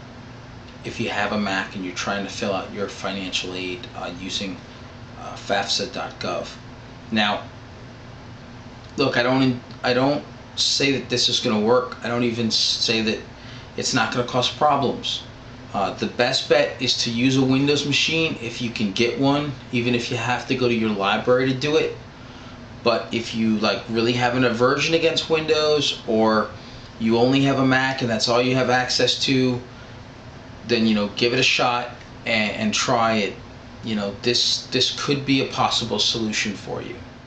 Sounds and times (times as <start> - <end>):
Speech: 0.8 - 7.5, 9.0 - 22.0, 22.8 - 29.7, 30.6 - 37.1.